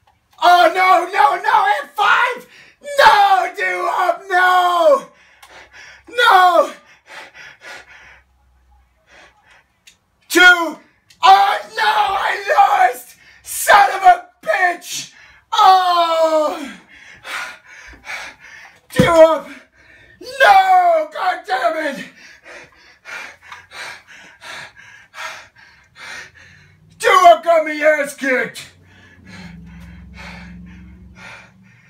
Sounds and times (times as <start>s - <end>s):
Speech: 10.3s - 16.6s, 20.2s - 22.1s, 27.0s - 28.7s.